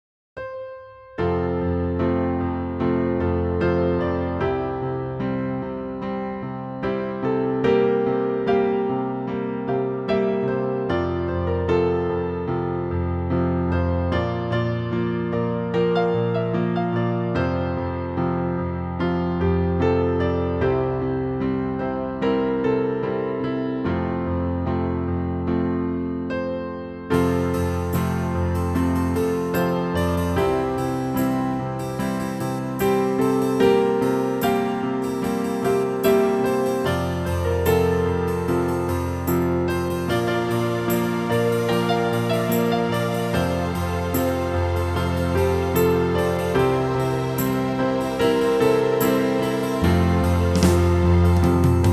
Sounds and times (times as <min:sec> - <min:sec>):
Music: 0:00.4 - 0:51.9.